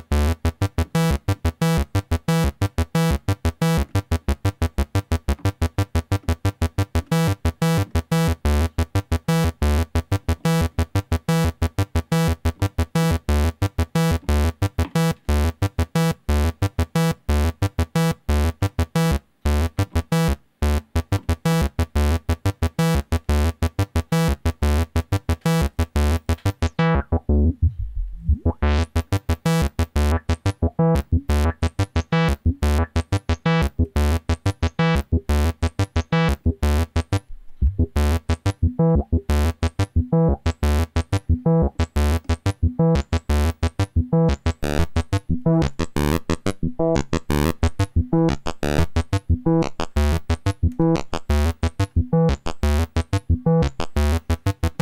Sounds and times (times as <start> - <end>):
Synthesizer: 0.0 - 54.8.